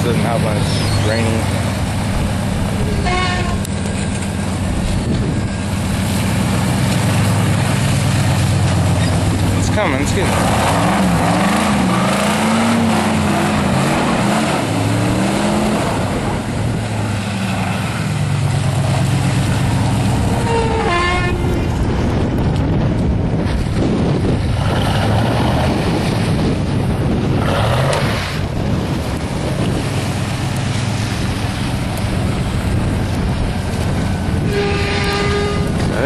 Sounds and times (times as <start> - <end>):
Outside, rural or natural: 0.0 - 36.0
Truck: 0.0 - 36.0.